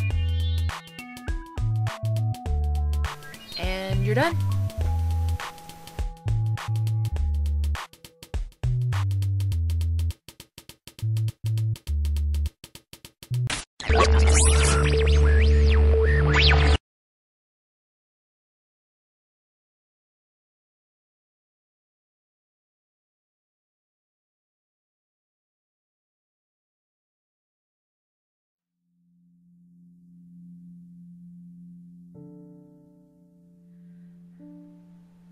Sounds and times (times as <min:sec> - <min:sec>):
Sine wave: 0:13.9 - 0:16.8, 0:28.7 - 0:32.1.